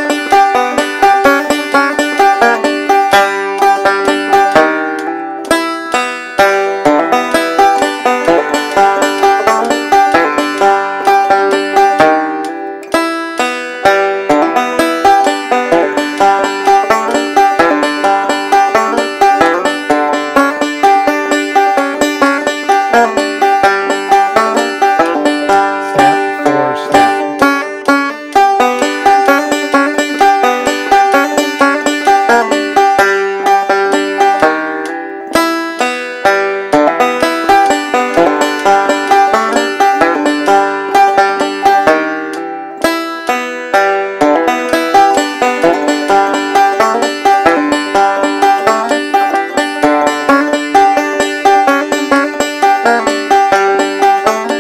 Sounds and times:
Banjo: 0.0s - 54.6s.

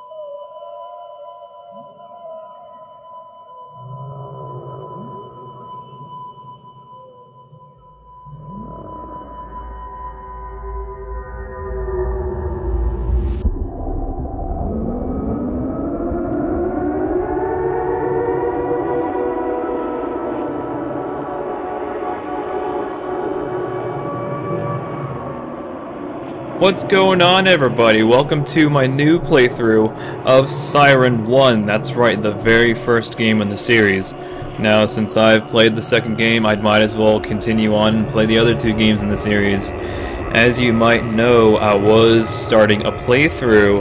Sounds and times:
Siren: 0.0s - 43.8s.

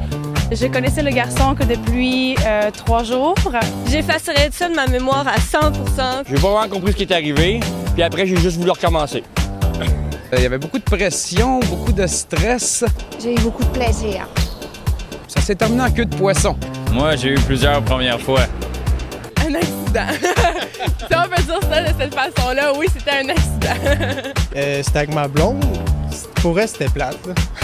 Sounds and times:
Music: 0.0s - 27.6s
Speech: 15.3s - 18.5s, 24.6s - 27.4s.

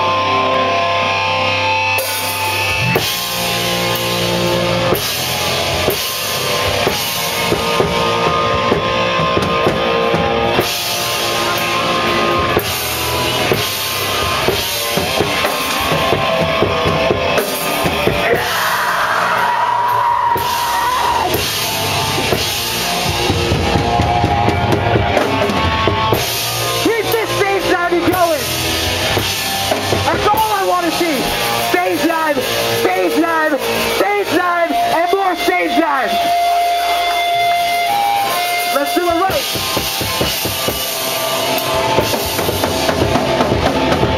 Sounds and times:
Music: 0.0s - 44.1s
Speech: 26.8s - 28.5s, 30.1s - 36.3s, 38.8s - 39.5s.

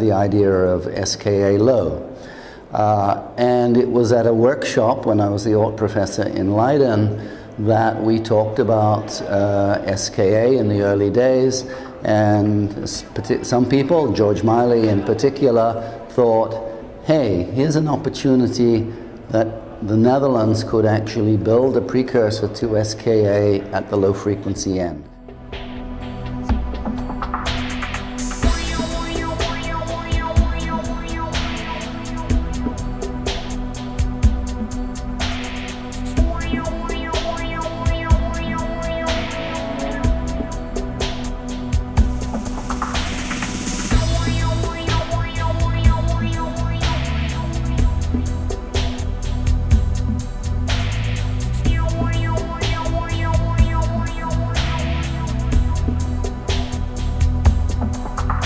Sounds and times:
Speech: 0.0s - 2.1s, 2.8s - 25.1s.

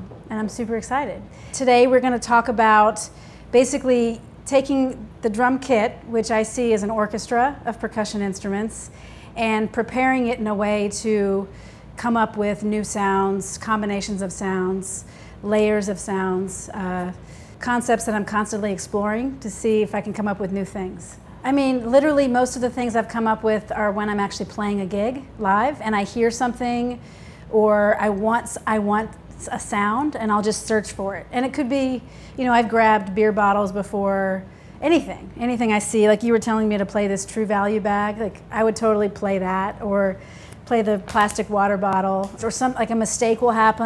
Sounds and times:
Speech: 0.0s - 43.8s.

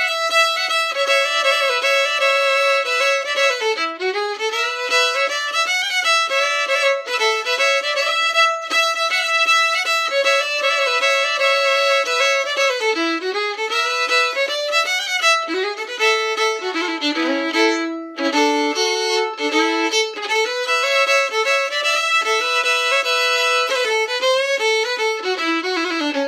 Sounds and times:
Violin, fiddle: 0.0s - 26.2s.

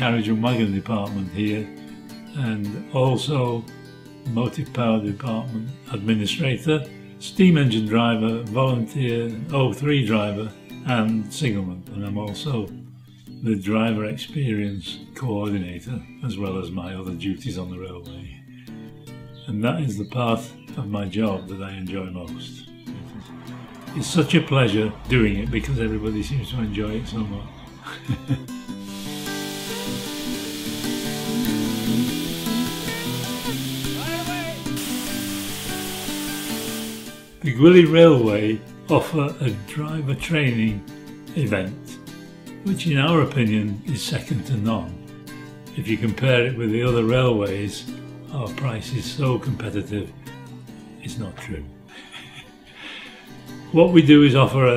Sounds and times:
Speech: 0.0s - 1.7s, 2.4s - 3.6s, 4.3s - 12.8s, 13.4s - 18.4s, 19.4s - 22.6s, 23.9s - 27.7s, 34.0s - 34.6s, 37.4s - 40.8s, 41.4s - 42.0s, 42.6s - 45.0s, 45.8s - 50.1s, 51.0s - 51.8s, 53.7s - 54.7s.

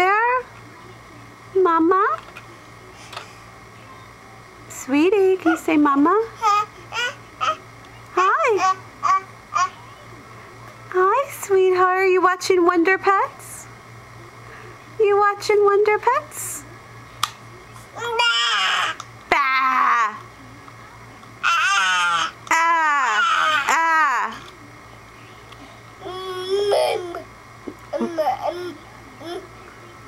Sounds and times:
Speech: 0.0s - 3.1s, 3.7s - 6.4s, 9.6s - 16.9s.

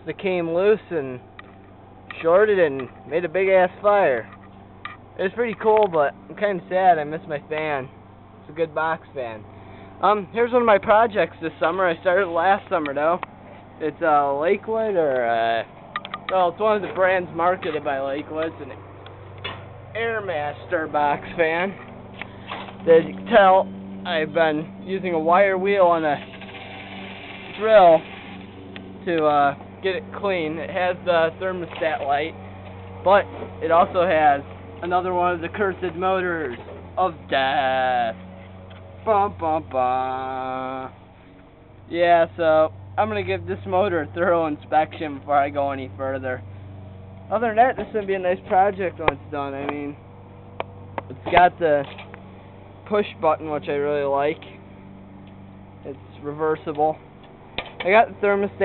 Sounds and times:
Speech: 0.0s - 1.2s, 2.1s - 4.3s, 5.2s - 7.9s, 8.5s - 9.4s, 10.0s - 13.2s, 13.8s - 15.7s, 16.3s - 18.8s, 19.9s - 21.8s, 22.8s - 26.3s, 27.5s - 28.1s, 29.0s - 32.4s, 33.1s - 38.2s, 39.0s - 41.0s, 41.9s - 46.4s, 47.3s - 50.0s, 51.1s - 51.9s, 52.9s - 54.5s, 55.8s - 57.0s, 57.8s - 58.6s.

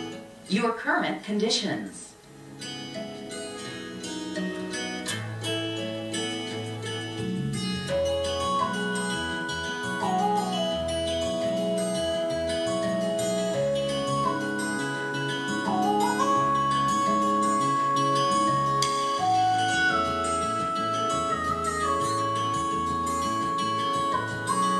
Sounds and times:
Music: 0.0s - 24.7s.

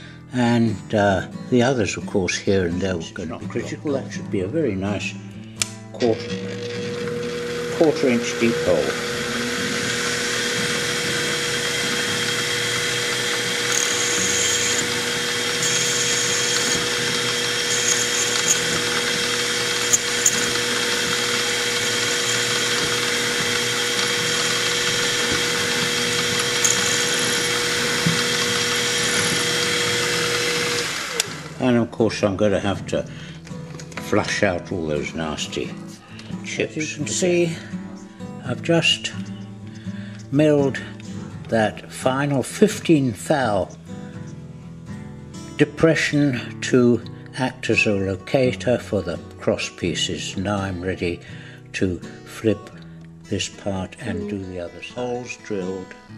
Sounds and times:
Speech: 0.3s - 5.2s, 6.0s - 6.3s, 7.7s - 9.0s, 31.6s - 33.1s, 34.0s - 37.7s, 38.4s - 39.2s, 40.3s - 40.9s, 41.5s - 43.7s, 45.6s - 51.2s, 51.8s - 52.7s, 53.3s - 56.0s
Drill: 6.0s - 31.7s.

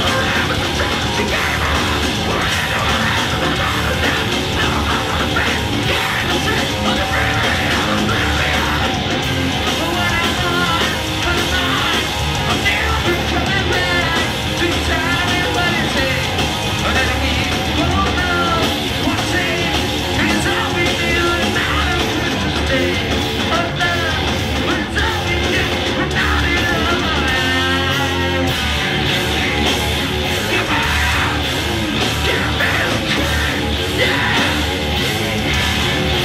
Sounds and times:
Independent music: 0.0s - 36.2s.

